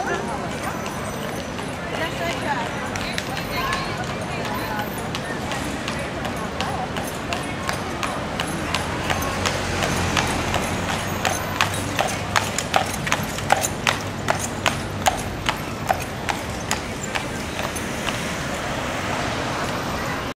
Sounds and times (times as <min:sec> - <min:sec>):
Clip-clop: 0:00.0 - 0:20.3.